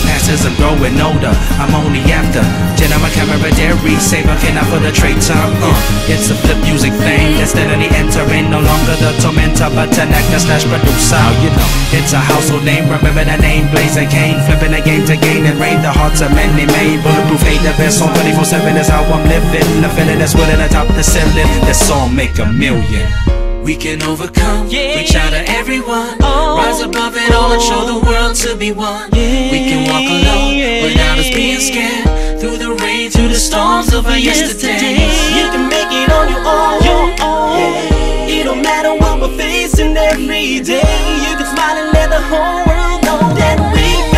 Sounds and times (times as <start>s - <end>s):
Rhythm and blues: 0.0s - 44.1s
Singing: 0.0s - 44.1s.